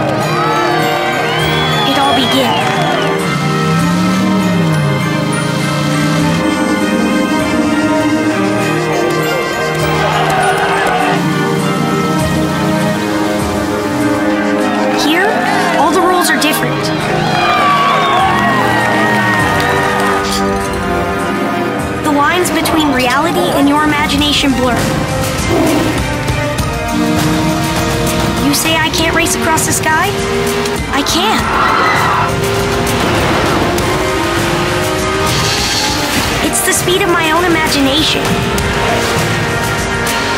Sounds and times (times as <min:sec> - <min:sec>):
Car: 0:00.0 - 0:40.3
Theme music: 0:00.0 - 0:40.3.